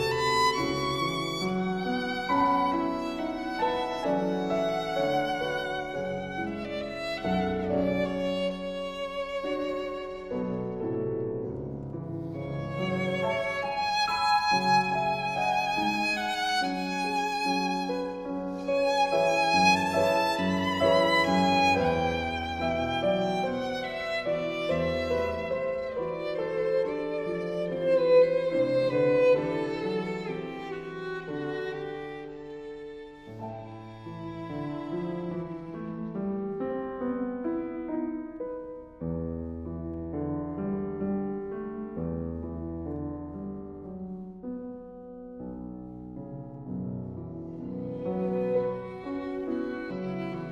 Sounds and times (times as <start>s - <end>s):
Violin, fiddle: 0.0s - 38.1s, 47.5s - 50.5s.